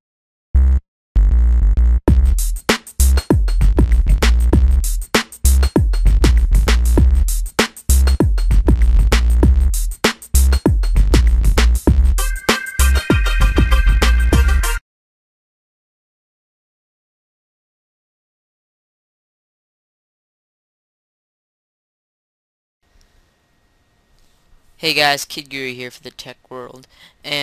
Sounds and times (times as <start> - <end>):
Drum machine: 2.1 - 14.8.